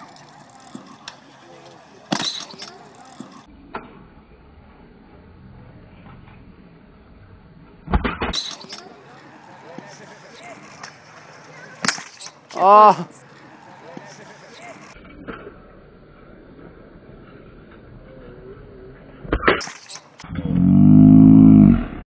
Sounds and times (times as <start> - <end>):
Speech: 1.1 - 3.4, 12.6 - 15.0.